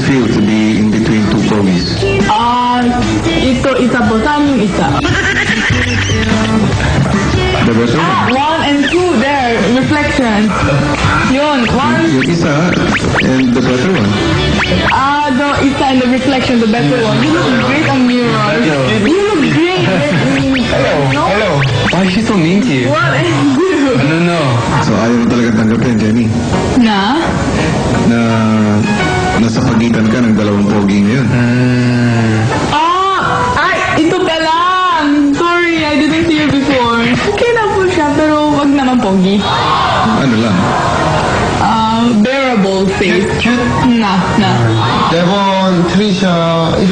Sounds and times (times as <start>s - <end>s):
Music: 0.0s - 40.0s.